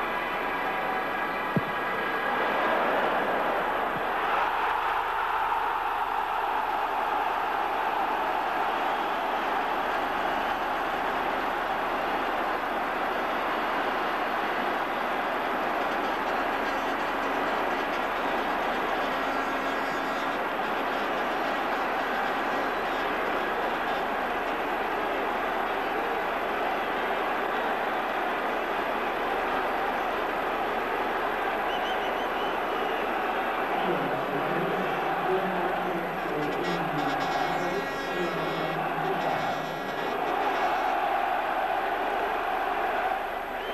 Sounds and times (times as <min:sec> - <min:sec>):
Speech: 0:33.8 - 0:40.2.